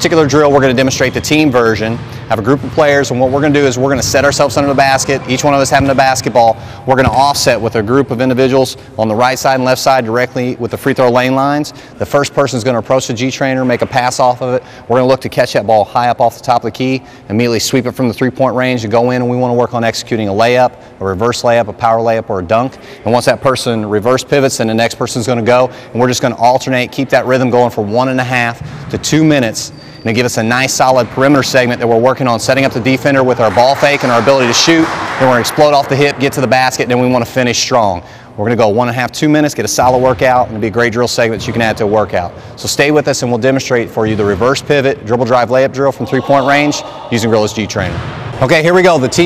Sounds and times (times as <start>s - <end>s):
Speech: 0.0s - 49.2s.